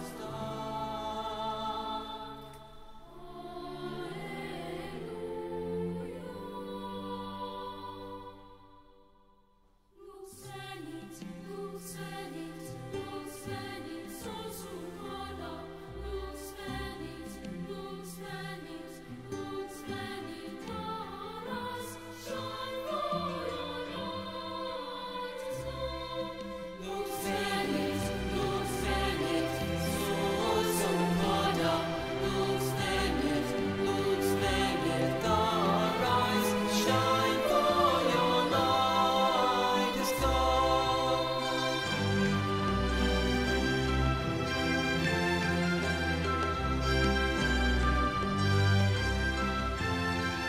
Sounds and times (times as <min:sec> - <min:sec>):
Opera: 0:00.0 - 0:50.4.